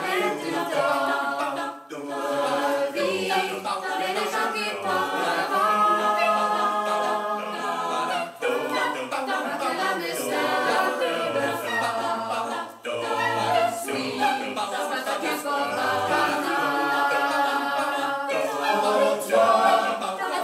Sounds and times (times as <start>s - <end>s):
A capella: 0.0s - 20.4s
Singing: 0.0s - 20.4s.